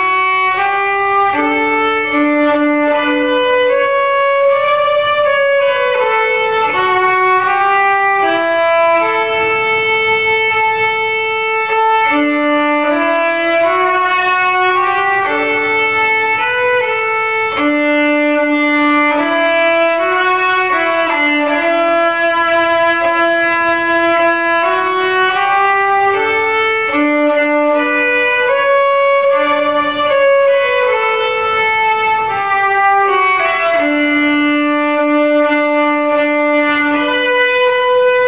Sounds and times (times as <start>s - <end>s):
Violin, fiddle: 0.0s - 38.2s.